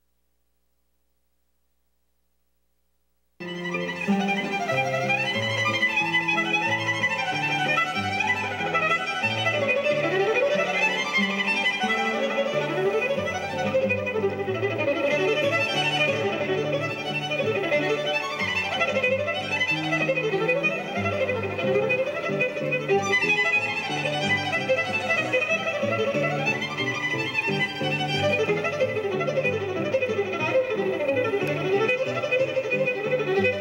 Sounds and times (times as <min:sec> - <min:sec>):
String section: 0:03.4 - 0:33.6.